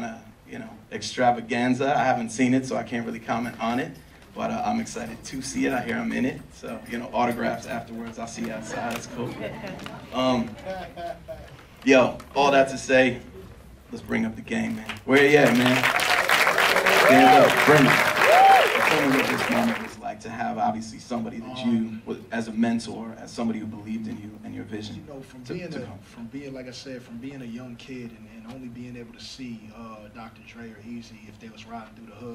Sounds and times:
Male speech, man speaking: 0:00.0 - 0:09.5, 0:10.1 - 0:13.3, 0:13.9 - 0:15.9, 0:17.1 - 0:18.0, 0:18.8 - 0:32.3.

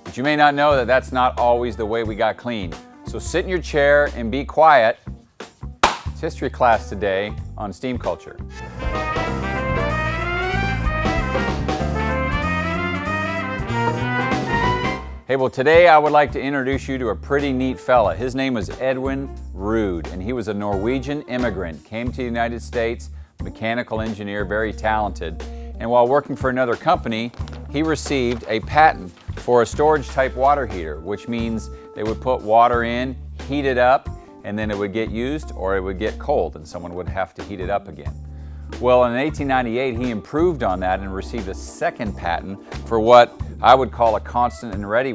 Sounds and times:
Speech: 0:00.0 - 0:05.0, 0:06.2 - 0:08.5, 0:15.3 - 0:38.1, 0:38.8 - 0:45.1
Music: 0:00.0 - 0:45.1.

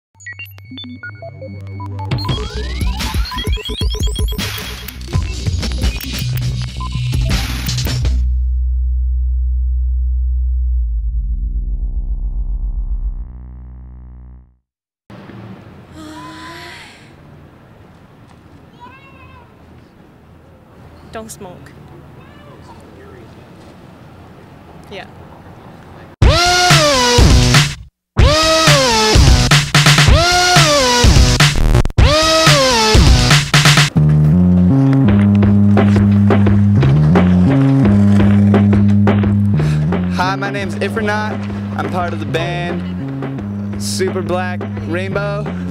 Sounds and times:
Sampler: 0:00.2 - 0:08.1, 0:26.2 - 0:33.9.

